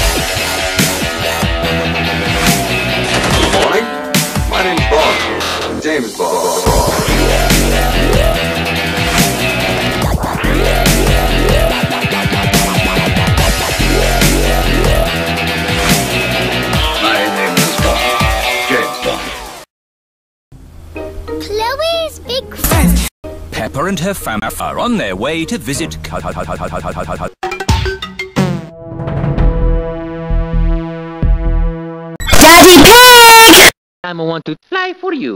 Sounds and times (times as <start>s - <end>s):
Music: 0.0s - 19.7s, 20.8s - 24.8s, 27.4s - 33.5s
Speech: 23.5s - 26.1s.